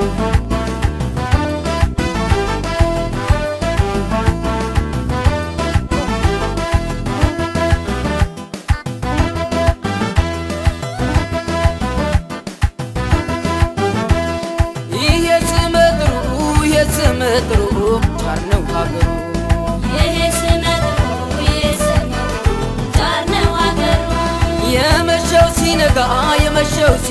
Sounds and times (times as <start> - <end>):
Music: 0.0 - 27.1.